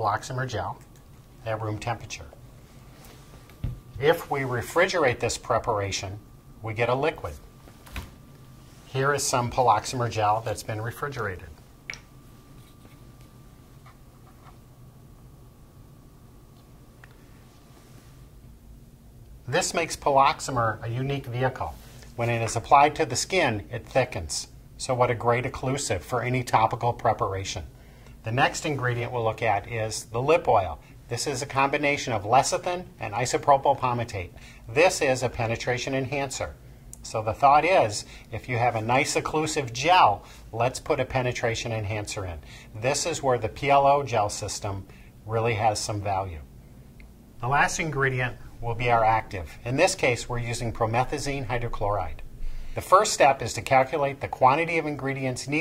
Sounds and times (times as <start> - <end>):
Speech: 0.0 - 2.4, 4.0 - 7.4, 8.9 - 11.6, 19.5 - 46.5, 47.4 - 52.2, 52.8 - 55.6.